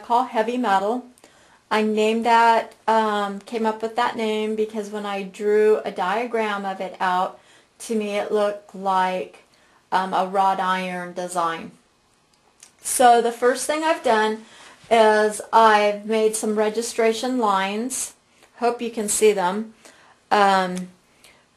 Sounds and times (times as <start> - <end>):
Speech: 0.0 - 1.1, 1.7 - 9.4, 10.0 - 11.8, 12.7 - 21.0.